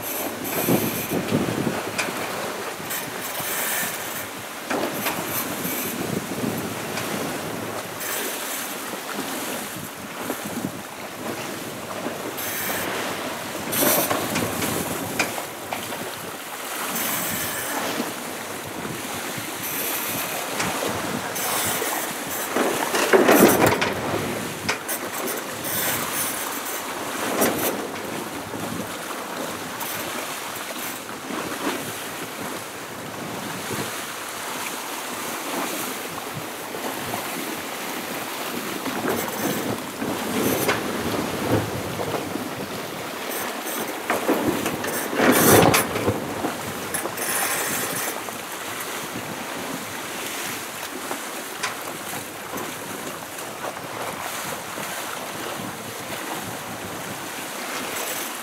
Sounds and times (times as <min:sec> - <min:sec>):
Ocean: 0:00.0 - 0:58.4
Sailboat, sailing ship: 0:00.0 - 0:58.4.